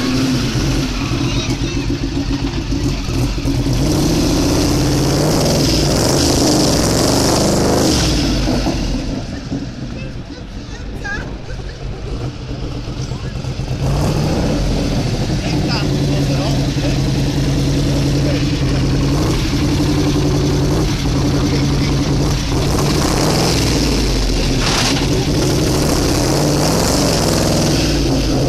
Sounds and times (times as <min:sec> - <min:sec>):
Speech: 0:15.4 - 0:17.0.